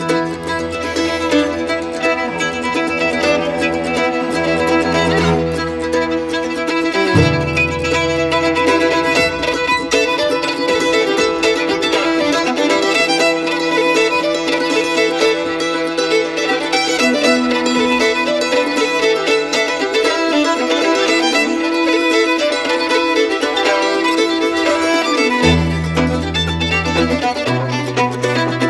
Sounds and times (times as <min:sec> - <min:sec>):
Cello: 0:00.0 - 0:28.7
Mandolin: 0:00.0 - 0:28.7
Violin, fiddle: 0:00.0 - 0:28.7.